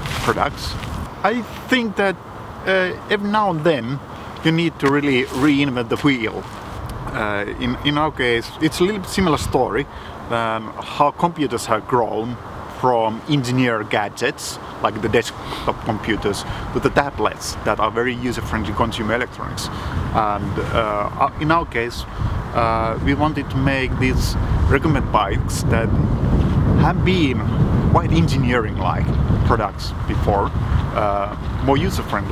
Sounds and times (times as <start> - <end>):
Speech: 0.0 - 25.9, 26.8 - 32.3.